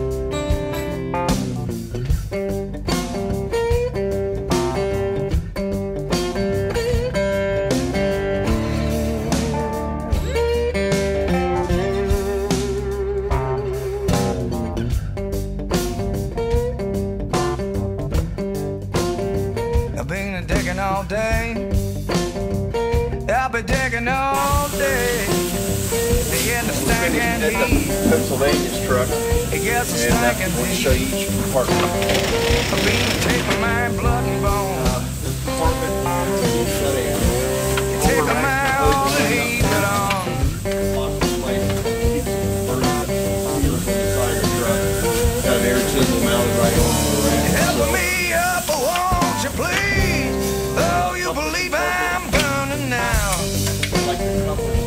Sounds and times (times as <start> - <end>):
Music: 0.0 - 54.8.